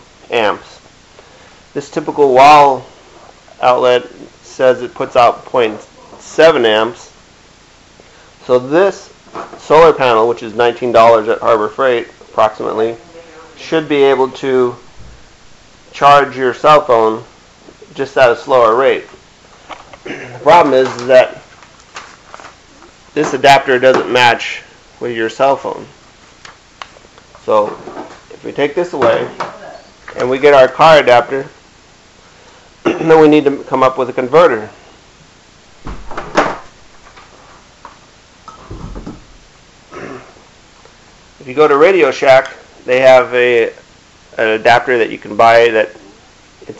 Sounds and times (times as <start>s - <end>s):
Speech: 0.3s - 0.8s, 1.8s - 2.9s, 3.6s - 7.2s, 8.4s - 14.8s, 16.0s - 17.3s, 17.9s - 19.2s, 20.4s - 21.5s, 23.2s - 26.0s, 27.4s - 31.6s, 32.9s - 34.8s, 41.4s - 43.8s, 44.4s - 46.8s.